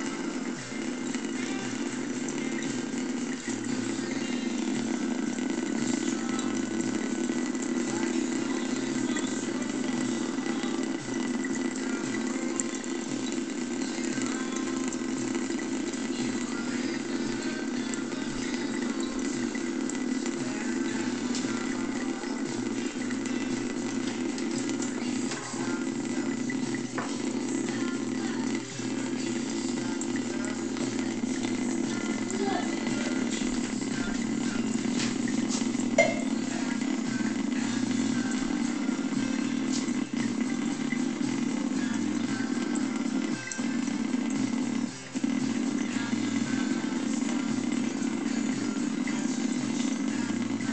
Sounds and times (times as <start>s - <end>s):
Gurgling: 0.0s - 50.7s
Music: 0.0s - 50.7s.